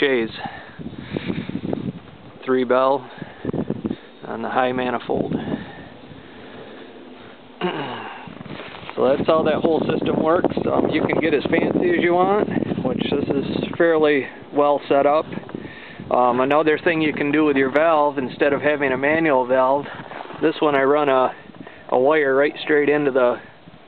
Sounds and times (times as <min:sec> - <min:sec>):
Speech: 0:00.0 - 0:00.5, 0:02.4 - 0:03.1, 0:04.2 - 0:05.4, 0:09.0 - 0:15.4, 0:16.1 - 0:23.5.